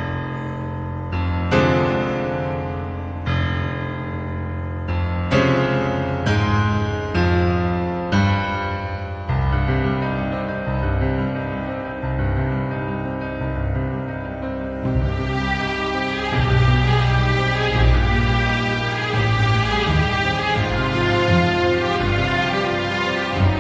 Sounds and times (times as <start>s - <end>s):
Music: 0.0s - 23.6s.